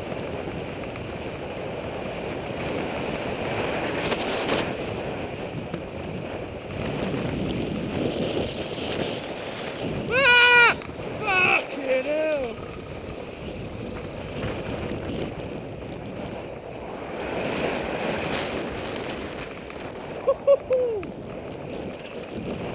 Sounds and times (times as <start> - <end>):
Bicycle: 0.0 - 22.7
Car: 10.8 - 19.9.